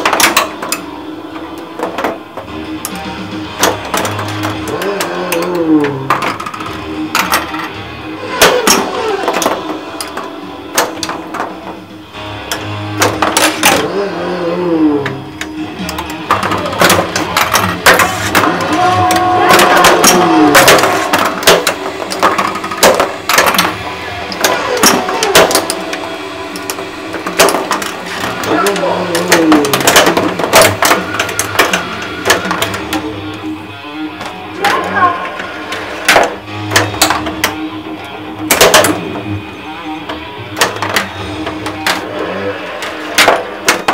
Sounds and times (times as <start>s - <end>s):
Music: 0.0s - 43.9s
Speech: 28.5s - 29.8s.